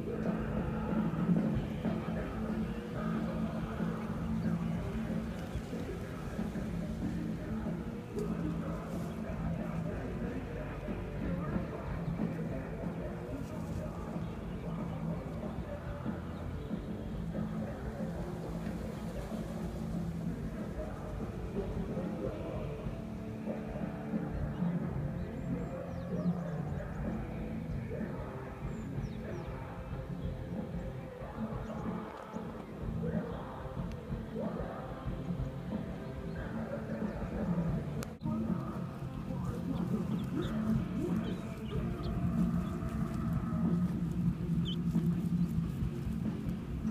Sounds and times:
Bird: 0:00.0 - 0:46.9
Music: 0:00.0 - 0:46.9.

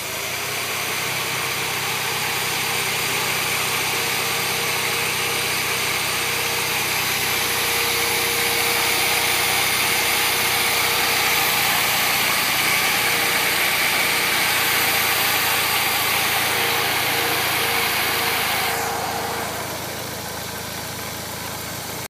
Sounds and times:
Medium engine (mid frequency): 0:00.0 - 0:22.1.

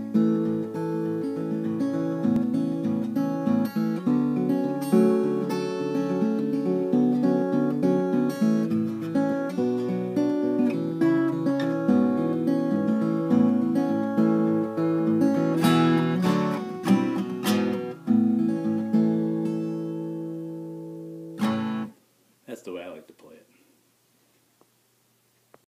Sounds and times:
Guitar: 0:00.0 - 0:22.7
Speech: 0:22.4 - 0:23.6.

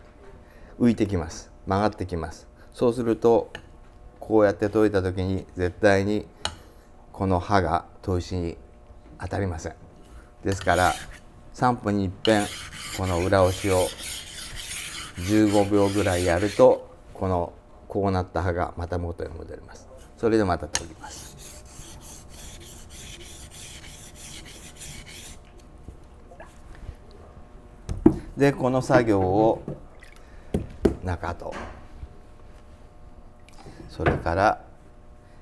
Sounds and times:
Filing (rasp): 0:10.5 - 0:11.2, 0:12.2 - 0:16.8, 0:21.0 - 0:25.4
Rub: 0:10.6 - 0:11.2, 0:12.3 - 0:16.8, 0:21.0 - 0:25.4.

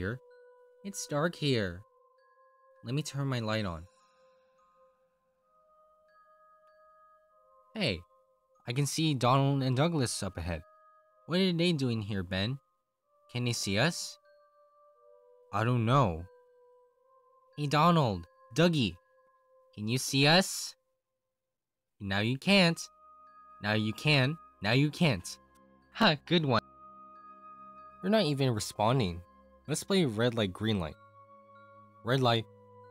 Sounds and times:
Speech: 0:00.0 - 0:00.2, 0:00.9 - 0:01.8, 0:02.8 - 0:03.9, 0:07.8 - 0:08.0, 0:08.7 - 0:10.6, 0:11.3 - 0:12.6, 0:13.3 - 0:14.2, 0:15.5 - 0:16.3, 0:17.6 - 0:19.0, 0:19.8 - 0:20.8, 0:22.0 - 0:22.9, 0:23.6 - 0:25.4, 0:26.0 - 0:26.6, 0:28.0 - 0:31.0, 0:32.0 - 0:32.5
Music: 0:00.0 - 0:32.9.

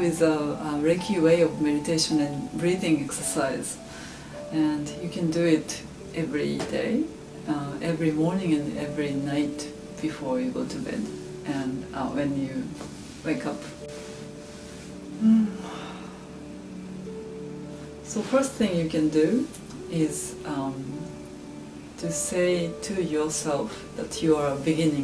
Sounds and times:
Music: 0:00.0 - 0:25.0.

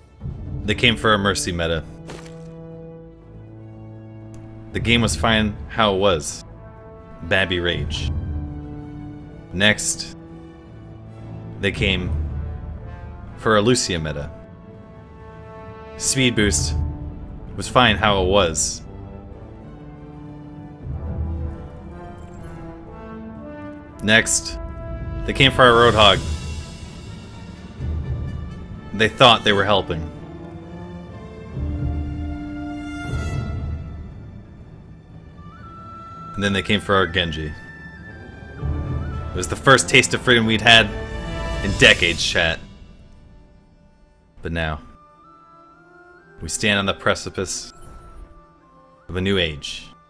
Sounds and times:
Music: 0:00.0 - 0:50.1
Male speech, man speaking: 0:00.6 - 0:02.0, 0:04.7 - 0:06.4, 0:07.2 - 0:08.2, 0:09.5 - 0:10.2, 0:11.6 - 0:12.2, 0:13.4 - 0:14.4, 0:16.0 - 0:16.8, 0:17.6 - 0:18.9, 0:24.0 - 0:24.6, 0:25.2 - 0:26.3, 0:28.9 - 0:30.2, 0:36.4 - 0:37.7, 0:39.3 - 0:41.0, 0:41.6 - 0:42.7, 0:44.4 - 0:45.0, 0:46.4 - 0:47.8, 0:49.1 - 0:50.0.

